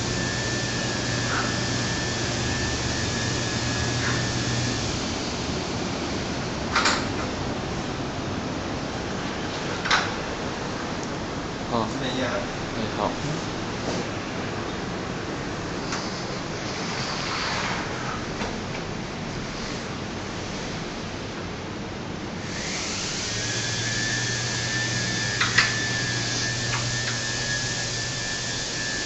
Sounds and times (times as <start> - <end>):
Speech: 11.7 - 13.5.